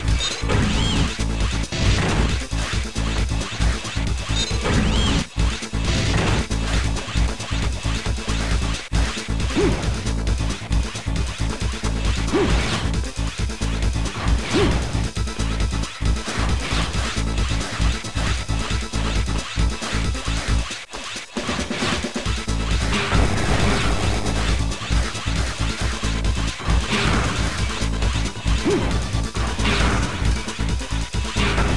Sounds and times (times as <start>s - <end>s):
Music: 0.0s - 31.7s.